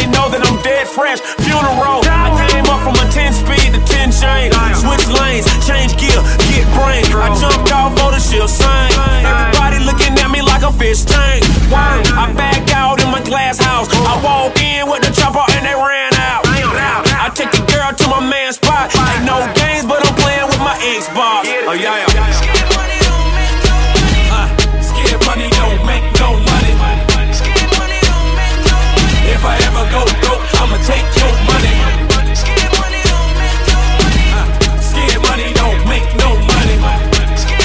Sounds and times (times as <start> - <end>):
Independent music: 0.0 - 37.6
Pop music: 0.0 - 37.6.